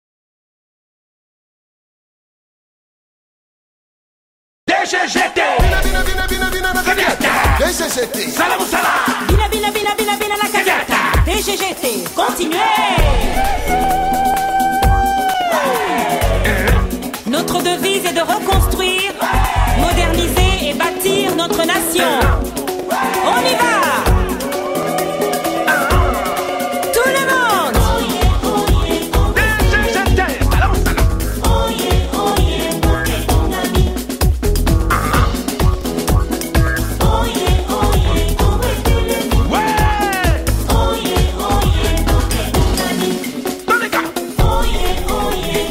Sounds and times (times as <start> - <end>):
Techno: 4.8 - 45.7.